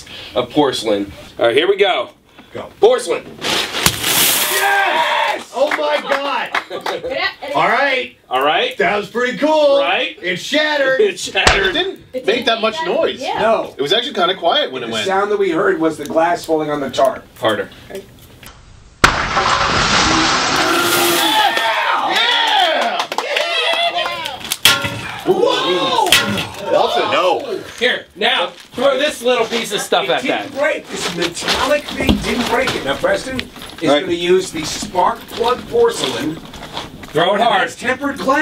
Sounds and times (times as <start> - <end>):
Breaking: 19.0 - 21.8, 24.4 - 25.3, 26.1 - 26.6.